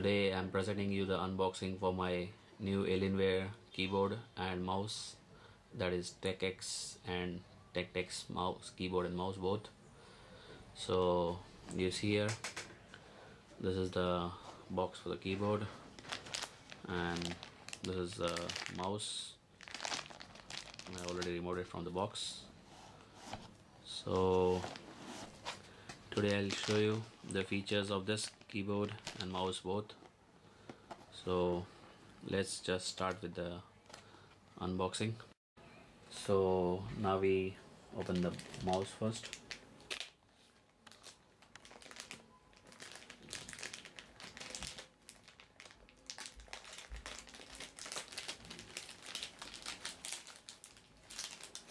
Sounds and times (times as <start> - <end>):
Speech: 0.0 - 5.2, 5.8 - 9.7, 10.8 - 12.4, 13.6 - 15.8, 16.9 - 19.4, 20.9 - 22.5, 23.8 - 24.7, 26.2 - 30.0, 31.1 - 33.7, 34.6 - 35.3, 36.1 - 39.3.